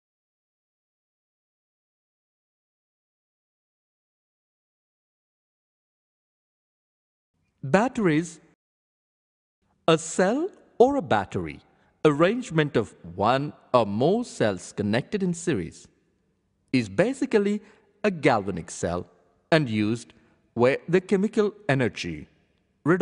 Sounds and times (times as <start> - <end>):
Speech: 7.6 - 8.6, 9.9 - 15.9, 16.7 - 23.0.